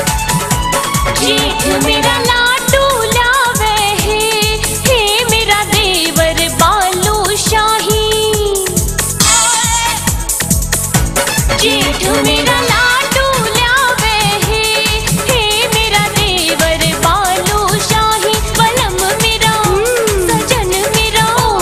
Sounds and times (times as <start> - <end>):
Song: 0.6 - 3.4, 11.0 - 13.1.